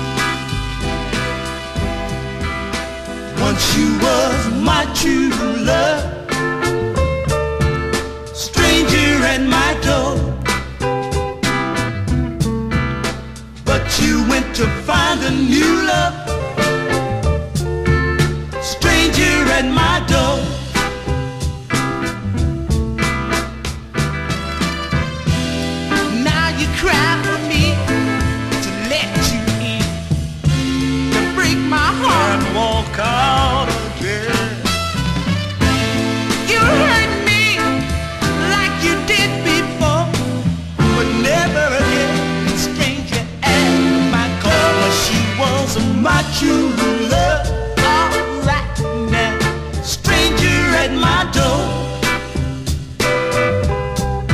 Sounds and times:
Music: 0.0s - 54.3s.

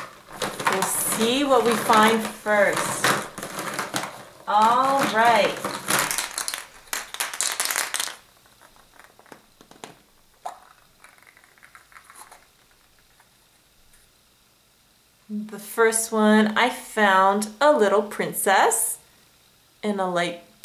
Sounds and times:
Speech: 0.7s - 3.1s, 4.5s - 5.7s, 15.3s - 19.0s, 19.8s - 20.5s.

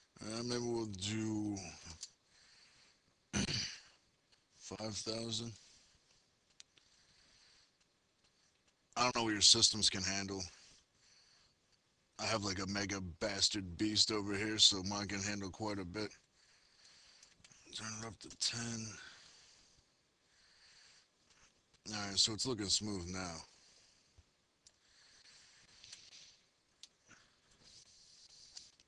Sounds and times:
Speech: 0.2s - 2.0s, 4.6s - 5.6s, 9.0s - 10.6s, 12.2s - 16.2s, 17.7s - 19.2s, 21.9s - 23.5s.

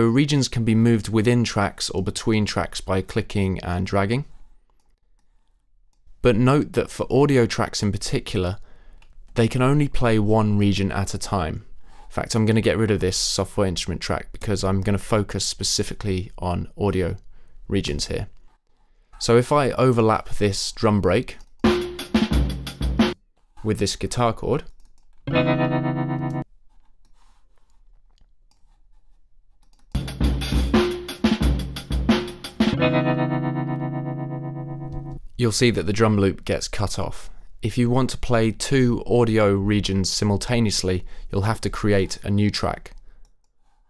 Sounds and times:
Speech: 0.0s - 4.3s, 6.2s - 8.6s, 9.4s - 18.4s, 19.2s - 21.5s, 23.6s - 24.8s, 35.4s - 43.0s
Inside, small room: 0.0s - 43.9s
Music: 21.7s - 23.2s, 25.3s - 26.4s, 30.0s - 35.2s.

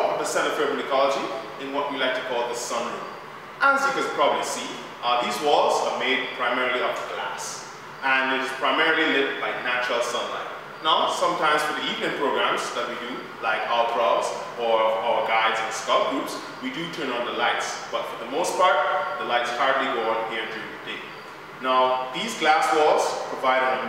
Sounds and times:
Speech: 0.0s - 23.8s.

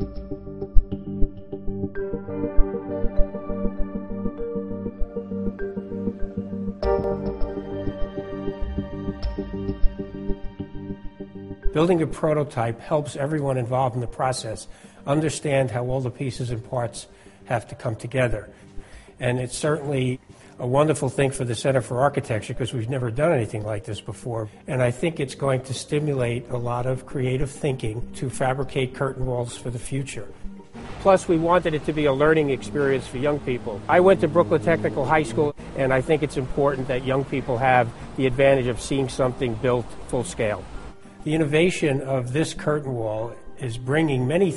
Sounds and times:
Music: 0.0s - 44.5s
Speech: 11.8s - 18.5s, 19.2s - 30.3s, 31.0s - 40.6s, 41.3s - 44.5s.

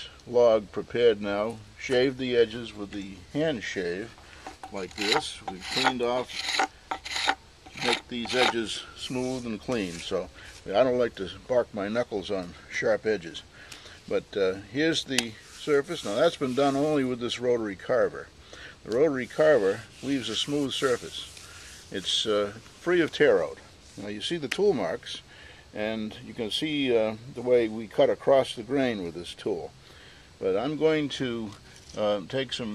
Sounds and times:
Speech: 0.0s - 6.4s, 7.8s - 29.7s, 30.4s - 32.7s
Tools: 4.4s - 8.6s
Wood: 4.4s - 8.7s.

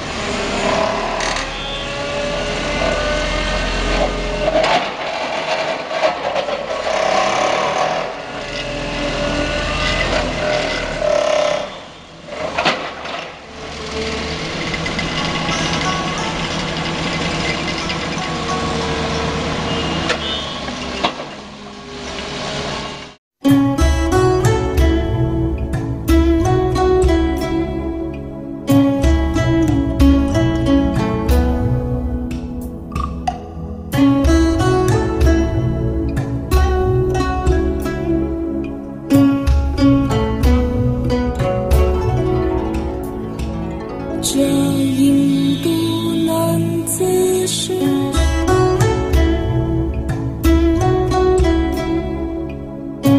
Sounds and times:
Zither: 12.3s - 19.8s, 33.6s - 53.1s.

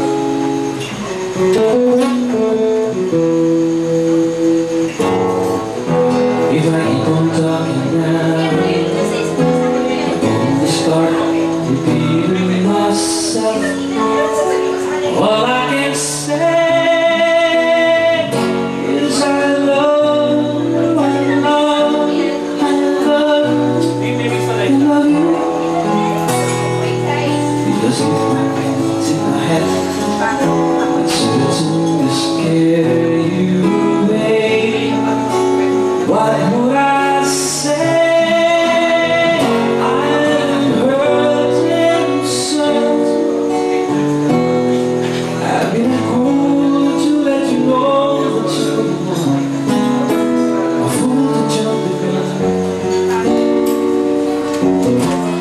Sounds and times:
Music: 0.0s - 55.4s
Singing: 6.3s - 44.1s, 45.0s - 53.3s
Speech: 6.5s - 44.1s.

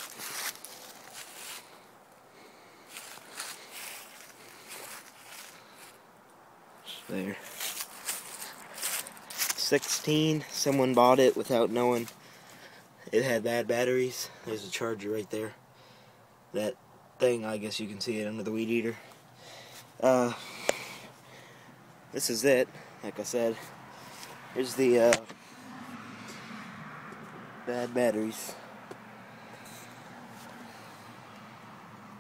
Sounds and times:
Speech: 6.9s - 7.5s, 9.6s - 12.1s, 13.1s - 15.6s, 16.6s - 19.0s, 20.0s - 20.4s, 22.2s - 23.7s, 24.6s - 25.3s, 27.7s - 28.6s.

